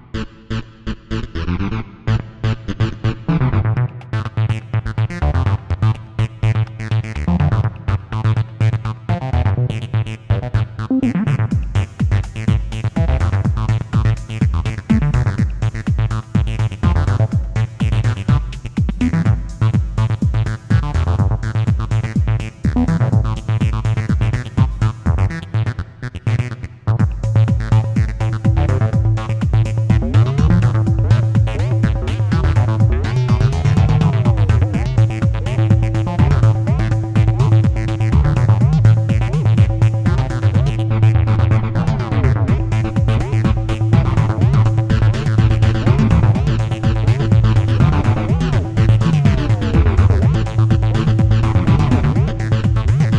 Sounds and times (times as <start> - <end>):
Electronica: 0.0 - 53.1.